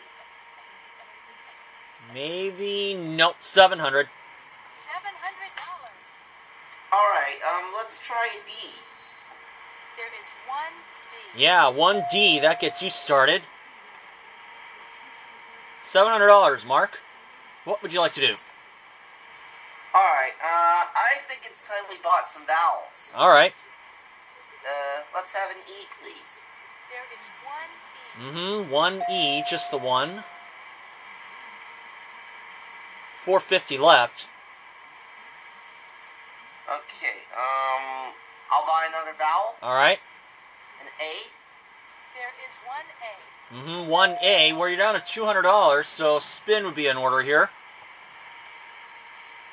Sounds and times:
Speech: 2.0s - 4.1s, 4.8s - 6.0s, 7.0s - 8.8s, 10.0s - 13.5s, 15.9s - 17.0s, 17.7s - 18.5s, 20.0s - 23.6s, 24.6s - 30.3s, 33.2s - 34.3s, 36.7s - 40.0s, 42.2s - 47.5s.

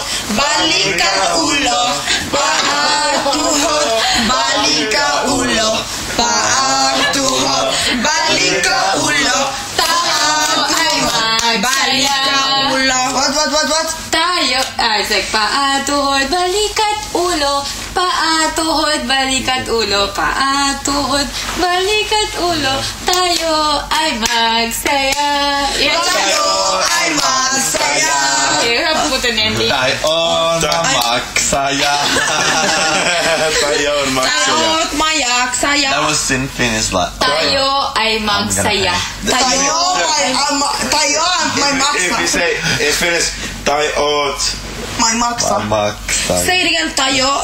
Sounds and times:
Female singing: 0.0s - 13.0s, 14.1s - 29.6s.

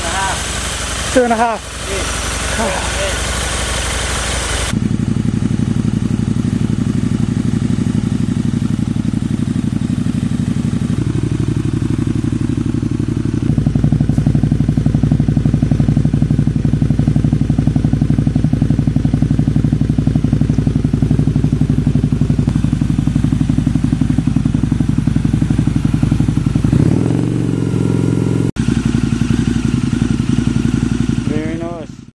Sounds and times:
Speech: 1.1s - 3.2s, 31.2s - 32.0s.

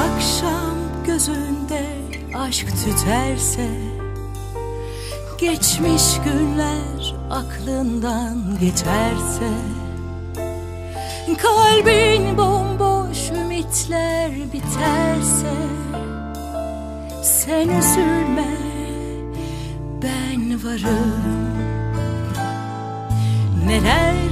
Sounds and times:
Music: 0.0s - 24.3s.

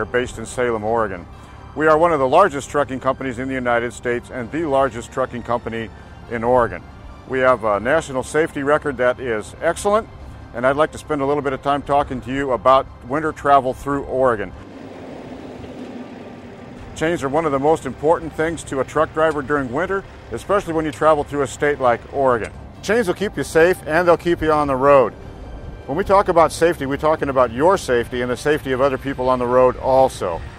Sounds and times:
Speech: 0.0s - 1.2s, 1.8s - 14.5s, 17.0s - 25.1s, 25.9s - 30.4s
Music: 0.0s - 30.5s.

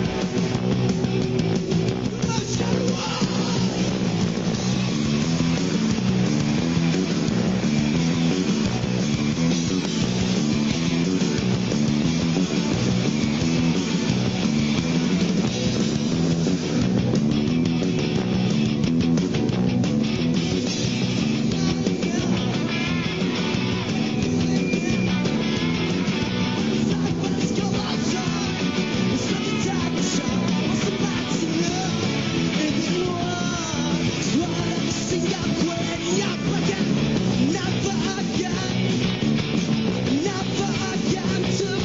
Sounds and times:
Music: 0.0s - 41.8s.

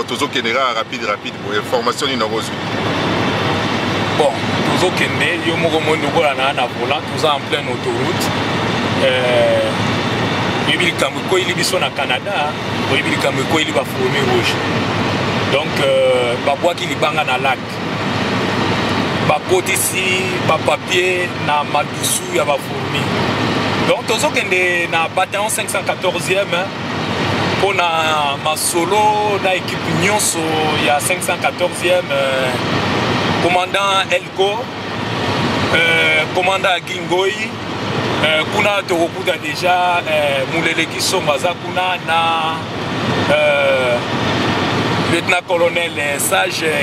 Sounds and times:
Speech: 0.0s - 2.6s, 4.2s - 8.4s, 9.0s - 9.8s, 10.7s - 14.6s, 15.5s - 17.8s, 19.3s - 23.2s, 23.8s - 26.7s, 27.6s - 32.6s, 33.4s - 34.7s, 35.7s - 37.6s, 38.2s - 42.6s, 43.3s - 44.0s, 45.1s - 46.8s.

